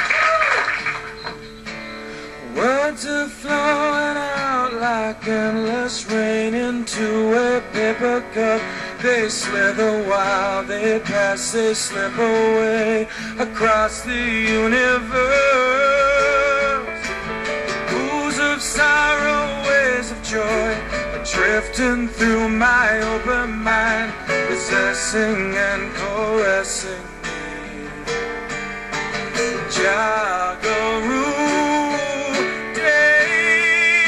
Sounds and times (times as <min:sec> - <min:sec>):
Music: 0:00.0 - 0:34.0
Male singing: 0:02.4 - 0:16.9, 0:17.9 - 0:28.2, 0:29.7 - 0:34.0.